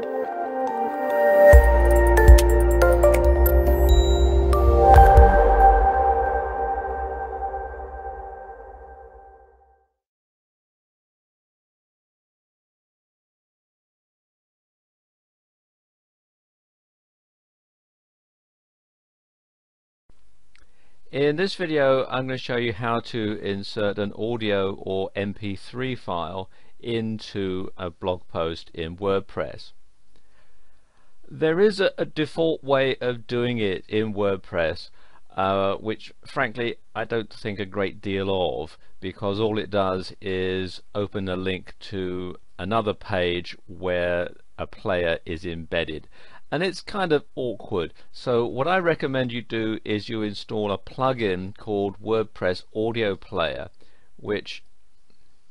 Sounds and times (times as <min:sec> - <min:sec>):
Music: 0:00.0 - 0:10.0
Sonar: 0:03.4 - 0:09.6.